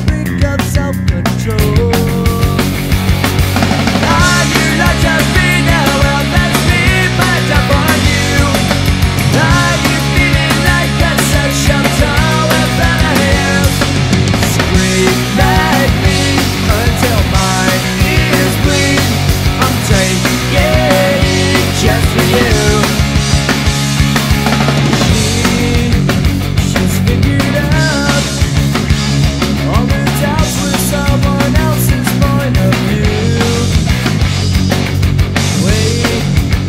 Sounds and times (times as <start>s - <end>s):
Exciting music: 1.6s - 36.6s.